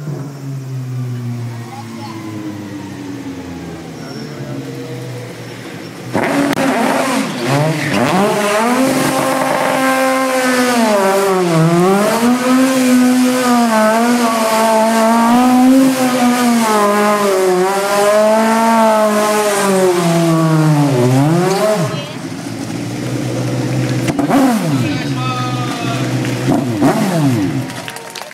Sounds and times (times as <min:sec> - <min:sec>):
Speech: 0:24.8 - 0:26.1.